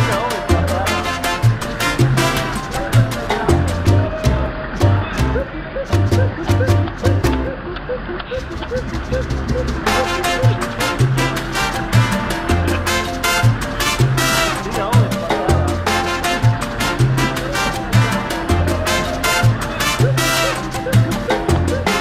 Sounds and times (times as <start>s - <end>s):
Music: 0.0s - 7.6s, 8.4s - 22.0s.